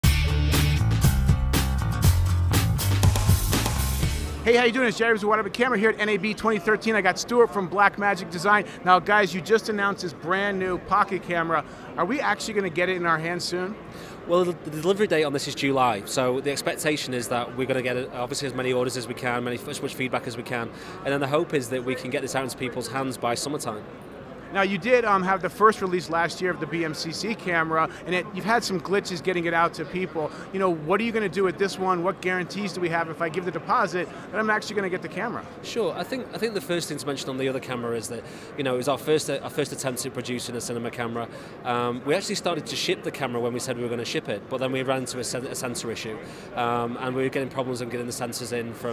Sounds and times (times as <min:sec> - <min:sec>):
Music: 0:00.0 - 0:04.6
Speech: 0:04.4 - 0:23.8, 0:24.5 - 0:48.9.